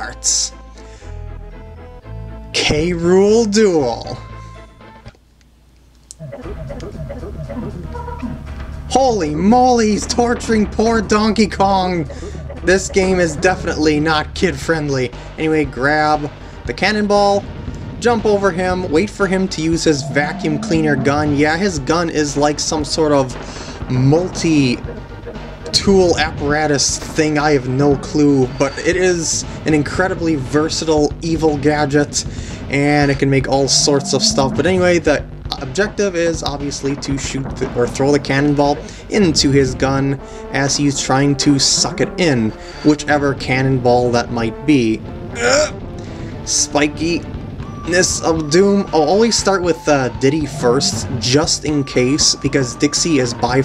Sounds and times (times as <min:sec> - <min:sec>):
Speech: 0:00.0 - 0:00.6, 0:02.5 - 0:04.2, 0:08.9 - 0:17.4, 0:18.0 - 0:24.8, 0:25.7 - 0:45.7, 0:46.5 - 0:47.2, 0:47.9 - 0:53.6
Music: 0:00.0 - 0:53.6.